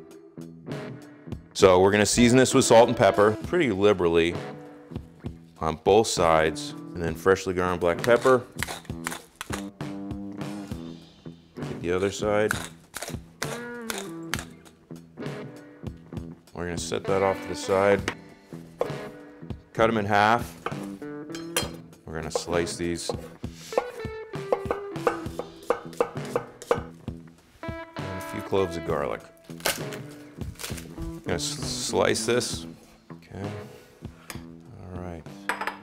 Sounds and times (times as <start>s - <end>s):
Music: 0.0s - 35.8s
Speech: 1.6s - 4.4s, 5.6s - 8.4s, 11.8s - 12.6s, 16.6s - 18.1s, 19.8s - 20.5s, 22.1s - 23.2s, 28.1s - 29.3s, 31.3s - 33.7s, 34.7s - 35.3s.